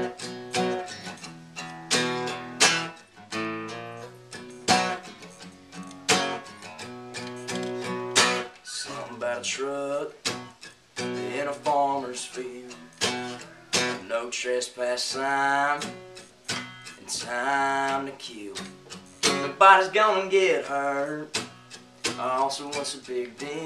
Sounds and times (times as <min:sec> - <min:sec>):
Music: 0:00.0 - 0:23.6.